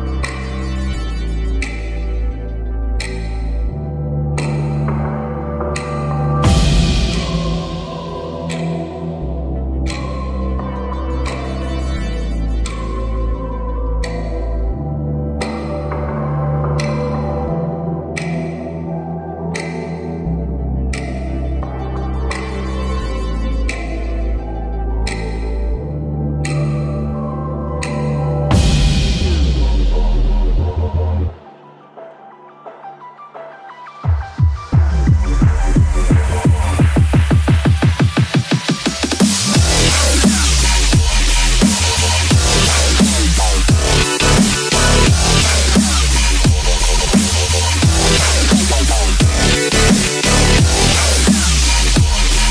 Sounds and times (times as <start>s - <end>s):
Music: 0.0s - 52.5s.